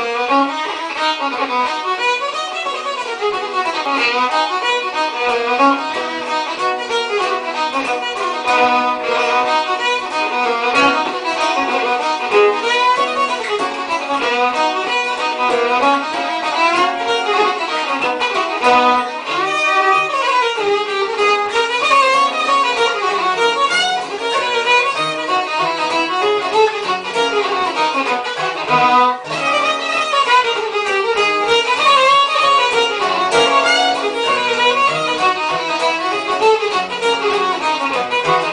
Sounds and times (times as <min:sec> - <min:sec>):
Violin, fiddle: 0:00.0 - 0:38.5.